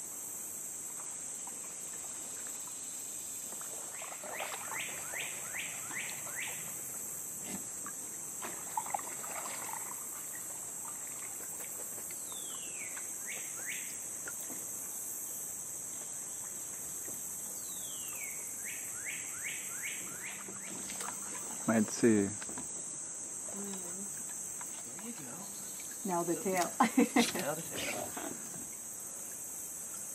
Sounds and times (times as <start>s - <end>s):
Rowboat, canoe, kayak: 0.0s - 30.1s.